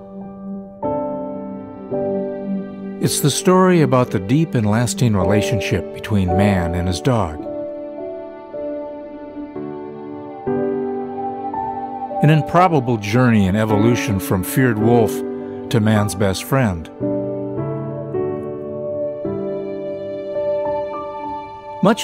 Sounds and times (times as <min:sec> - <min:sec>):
Music: 0:00.0 - 0:22.0
Speech: 0:03.0 - 0:07.5, 0:12.2 - 0:16.9, 0:21.8 - 0:22.0.